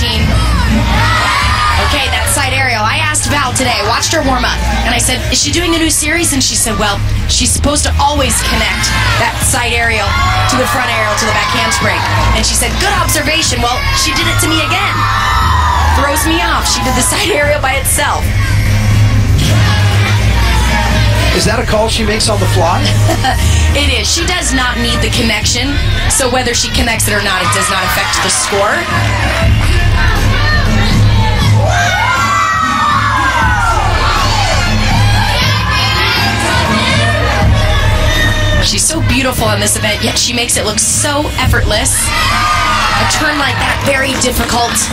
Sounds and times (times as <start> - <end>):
Inside, large room or hall: 0.0 - 44.9
Music: 0.0 - 44.9
Speech: 23.8 - 28.9, 38.6 - 42.0.